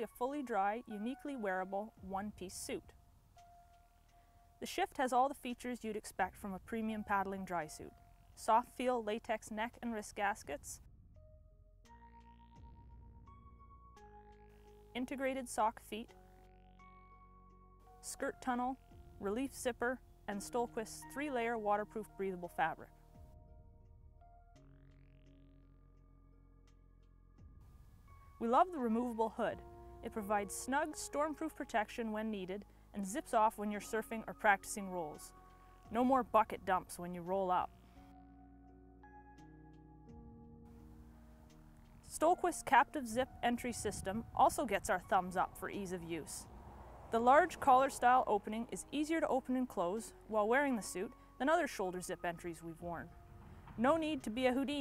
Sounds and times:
Speech: 0.0s - 2.9s, 4.6s - 10.8s, 15.0s - 16.2s, 18.0s - 22.9s, 28.4s - 35.3s, 35.9s - 37.7s, 42.1s - 46.5s, 47.2s - 53.1s, 53.8s - 54.8s
Music: 0.0s - 54.8s.

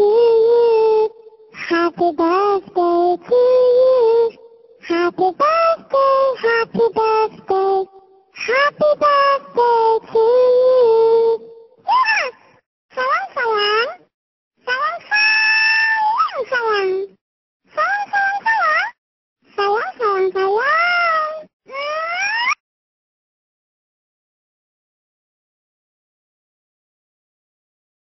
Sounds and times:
Speech: 0.0s - 11.0s, 11.9s - 12.4s, 13.0s - 14.0s, 14.6s - 17.2s, 17.8s - 22.5s.

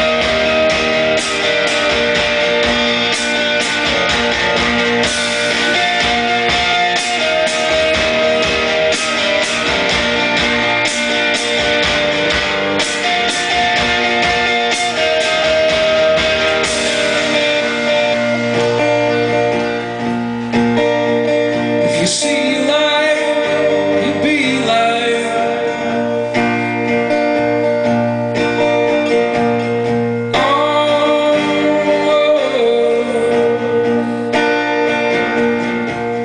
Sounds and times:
Drum: 0.0s - 19.2s
Drum kit: 0.0s - 32.1s.

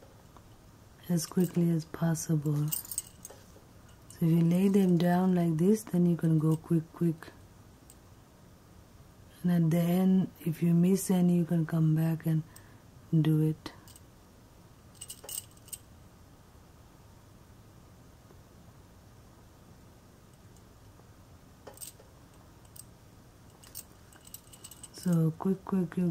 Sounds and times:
Inside, small room: 0.0s - 26.1s
Speech: 1.0s - 2.8s, 4.2s - 7.4s, 9.4s - 12.5s, 13.1s - 13.8s, 25.0s - 26.1s.

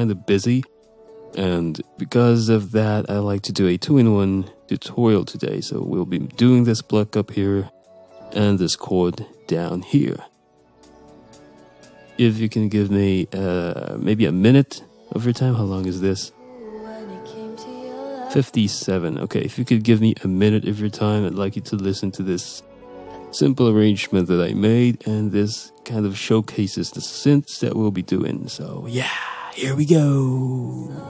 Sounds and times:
Speech: 0.0s - 0.7s, 1.4s - 7.7s, 8.3s - 10.3s, 12.2s - 16.3s, 18.3s - 22.6s, 23.3s - 31.0s
Music: 0.0s - 31.0s.

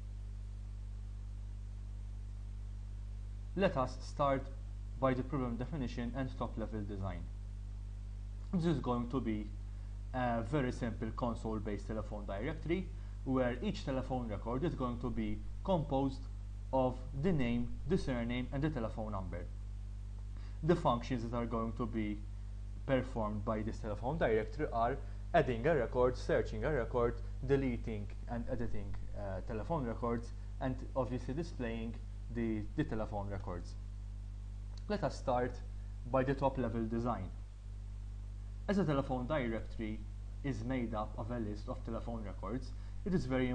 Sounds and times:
Speech: 3.6s - 7.3s, 8.5s - 19.6s, 20.6s - 33.8s, 34.8s - 37.4s, 38.7s - 43.5s.

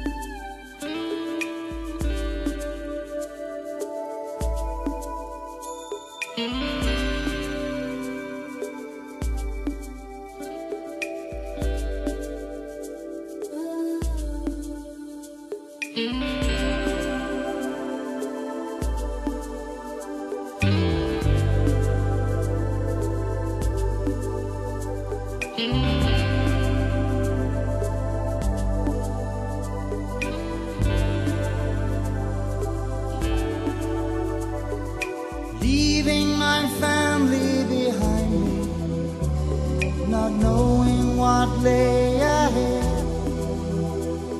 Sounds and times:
Tender music: 0.0s - 44.3s.

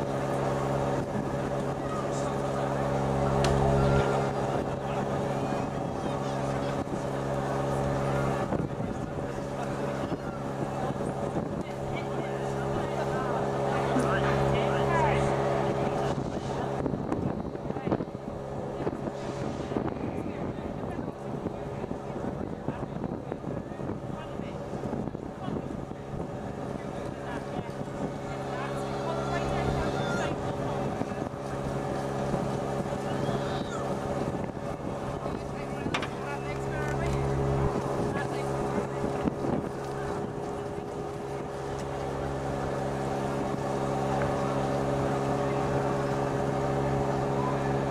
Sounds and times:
Speech: 0.0s - 43.4s, 44.0s - 47.9s.

